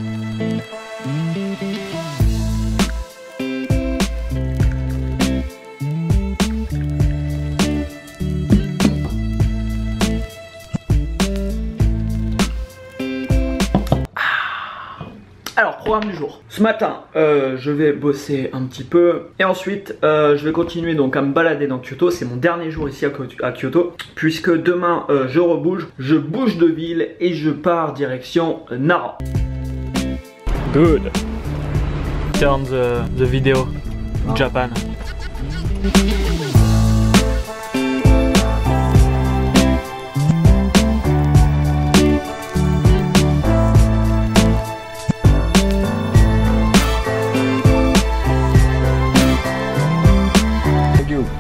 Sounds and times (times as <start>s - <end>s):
Music: 0.0s - 14.1s, 29.2s - 51.4s.